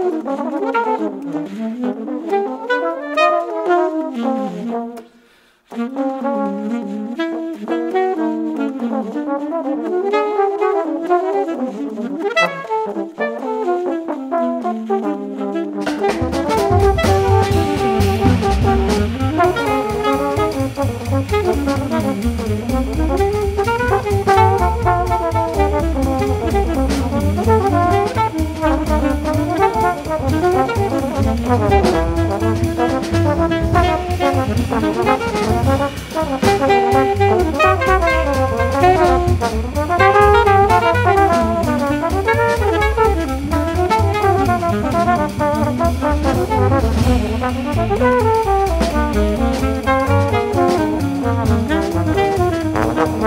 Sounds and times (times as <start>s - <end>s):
Trombone: 0.0s - 53.2s
Drum kit: 5.7s - 53.2s.